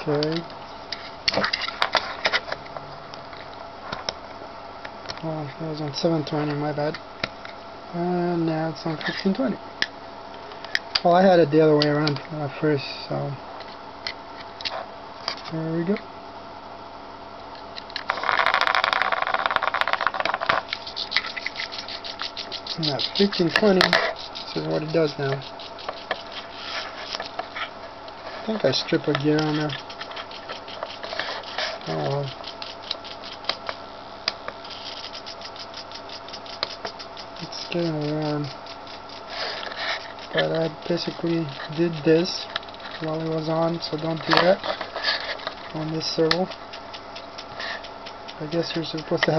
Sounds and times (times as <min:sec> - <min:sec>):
Speech: 0:00.0 - 0:00.5, 0:05.2 - 0:07.0, 0:07.9 - 0:09.6, 0:11.0 - 0:13.4, 0:15.5 - 0:16.0, 0:22.8 - 0:24.0, 0:24.6 - 0:25.4, 0:28.4 - 0:29.8, 0:31.9 - 0:32.4, 0:37.4 - 0:38.6, 0:40.3 - 0:44.6, 0:45.7 - 0:46.6, 0:48.4 - 0:49.3.